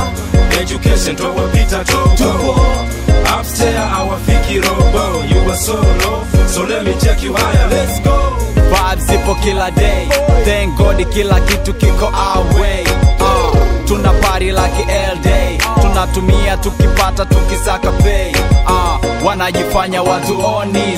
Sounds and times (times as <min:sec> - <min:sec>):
Pop music: 0:00.0 - 0:20.9.